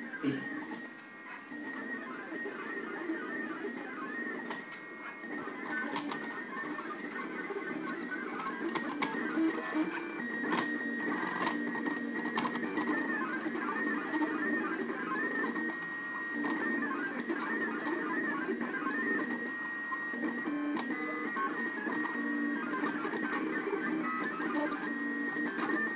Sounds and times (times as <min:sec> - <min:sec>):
Printer: 0:00.0 - 0:25.9.